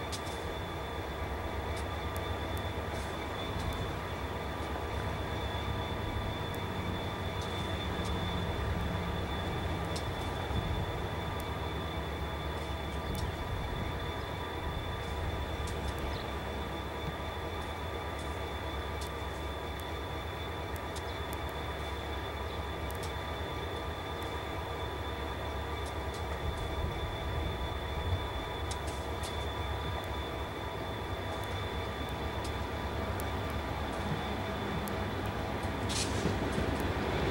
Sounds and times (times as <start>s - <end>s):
Outside, rural or natural: 0.0s - 37.3s
Railroad car, train wagon: 0.0s - 37.3s
Train: 0.0s - 37.3s.